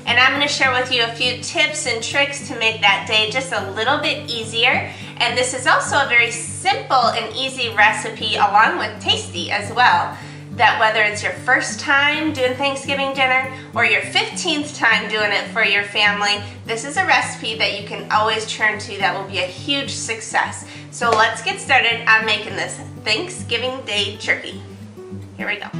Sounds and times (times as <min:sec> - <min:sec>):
Speech: 0:00.0 - 0:24.6, 0:25.4 - 0:25.8
Music: 0:00.0 - 0:25.8.